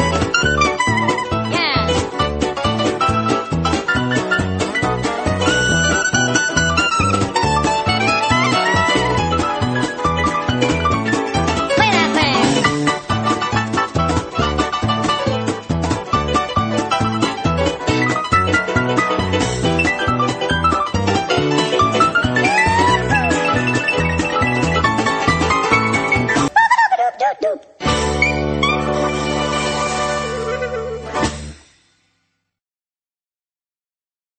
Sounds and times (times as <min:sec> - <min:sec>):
Music: 0:00.0 - 0:26.6, 0:27.8 - 0:32.6.